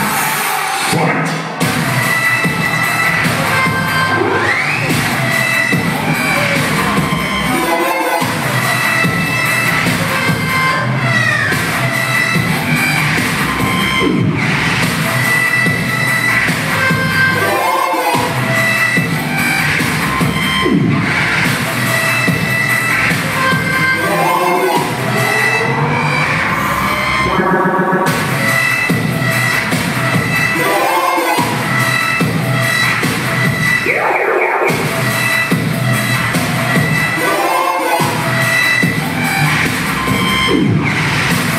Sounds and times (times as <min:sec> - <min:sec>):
Dubstep: 0:00.0 - 0:41.5.